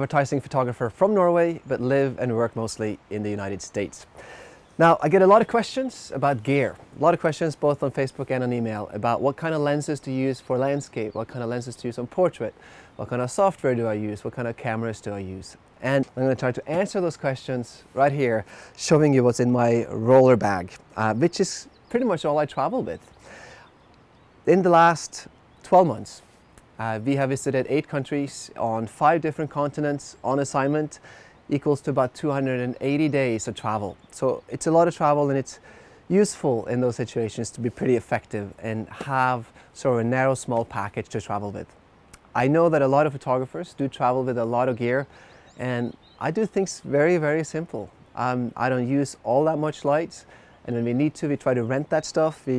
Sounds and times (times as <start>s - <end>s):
Speech: 0.0s - 4.1s, 4.8s - 23.1s, 24.5s - 26.2s, 26.8s - 52.5s.